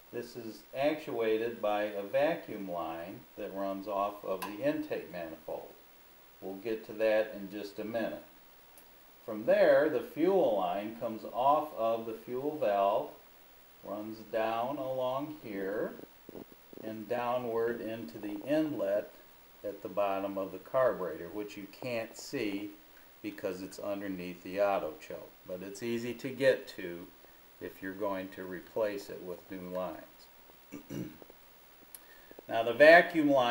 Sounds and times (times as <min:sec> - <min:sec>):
Speech: 0:00.1 - 0:05.8, 0:06.4 - 0:08.3, 0:09.2 - 0:13.2, 0:13.8 - 0:16.1, 0:16.8 - 0:30.3, 0:32.5 - 0:33.5.